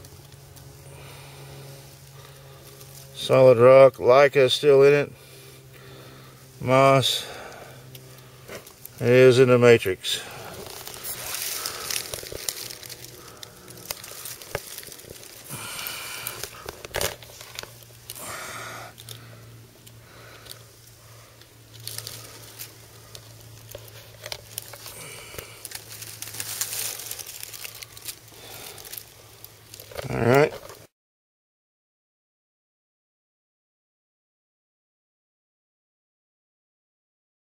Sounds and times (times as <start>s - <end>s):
Outside, rural or natural: 0.0s - 30.9s.